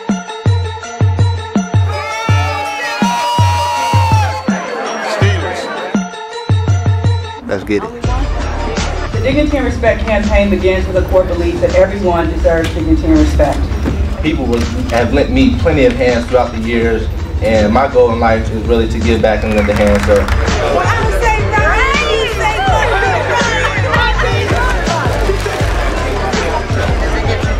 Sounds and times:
Music: 0:00.0 - 0:27.5.

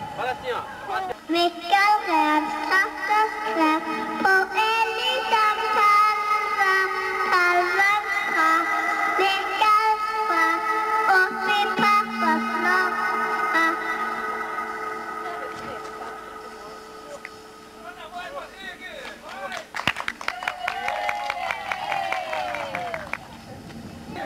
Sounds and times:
Child singing: 0:01.3 - 0:16.2
Speech: 0:15.2 - 0:19.7.

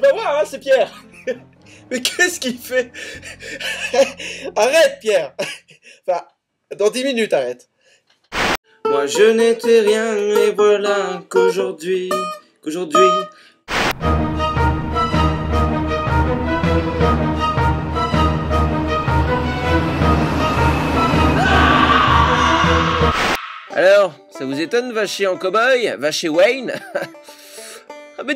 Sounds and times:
Speech: 0:00.0 - 0:01.0, 0:02.0 - 0:02.9, 0:04.6 - 0:05.4, 0:06.1 - 0:07.7, 0:23.8 - 0:26.8
Music: 0:00.0 - 0:05.2, 0:08.7 - 0:28.3.

